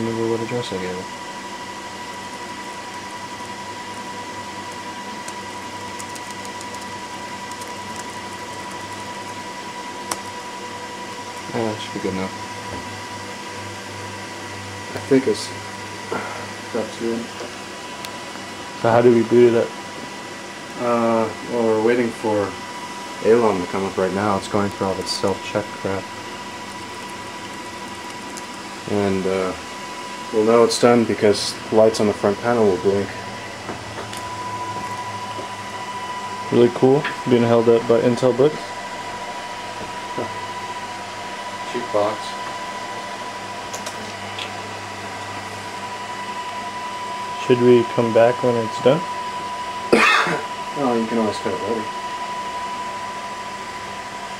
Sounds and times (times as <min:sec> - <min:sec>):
Speech: 0:00.0 - 0:01.1, 0:11.5 - 0:12.4, 0:14.9 - 0:15.6, 0:16.7 - 0:17.3, 0:18.8 - 0:19.7, 0:20.8 - 0:22.6, 0:23.2 - 0:26.0, 0:28.9 - 0:29.6, 0:30.3 - 0:33.2, 0:36.5 - 0:38.7, 0:41.7 - 0:42.4, 0:47.4 - 0:49.1, 0:50.8 - 0:51.9.